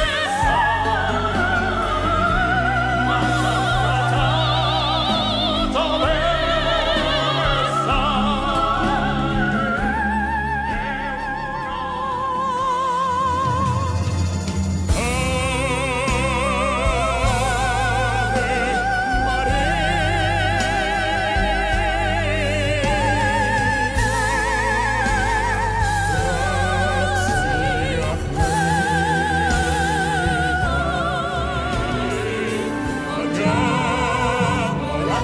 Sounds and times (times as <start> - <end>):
Opera: 0.0 - 35.2.